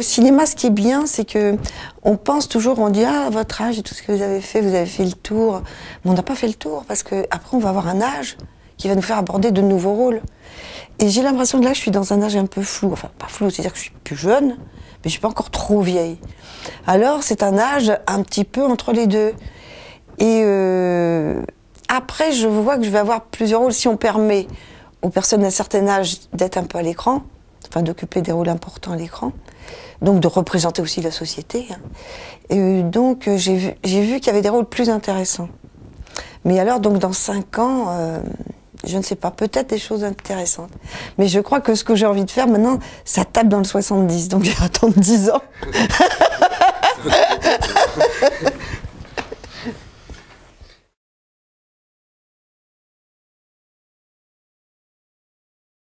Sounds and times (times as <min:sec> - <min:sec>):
Speech: 0:00.0 - 0:10.3, 0:11.0 - 0:16.3, 0:16.9 - 0:19.4, 0:20.2 - 0:29.4, 0:30.0 - 0:31.8, 0:32.5 - 0:35.6, 0:36.4 - 0:45.5
Snicker: 0:45.6 - 0:49.8.